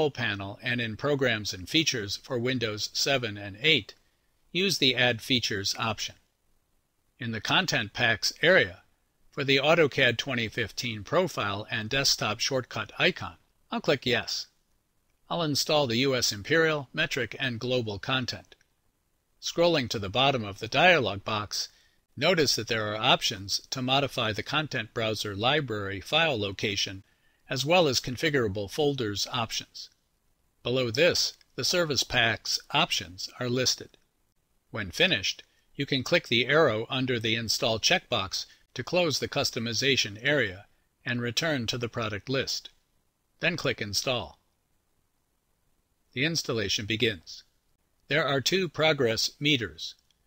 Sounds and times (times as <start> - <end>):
Speech: 0.0 - 6.2, 7.2 - 14.6, 15.3 - 18.6, 19.4 - 30.0, 30.7 - 34.0, 34.7 - 42.8, 43.4 - 44.5, 46.1 - 47.5, 48.1 - 50.0.